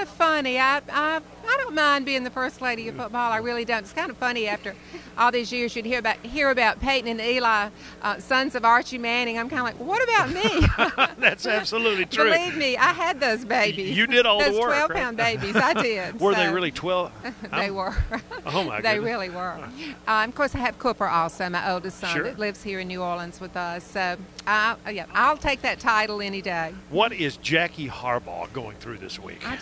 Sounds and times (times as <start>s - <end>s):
Speech: 0.8s - 17.9s, 18.5s - 23.3s, 26.9s - 29.6s.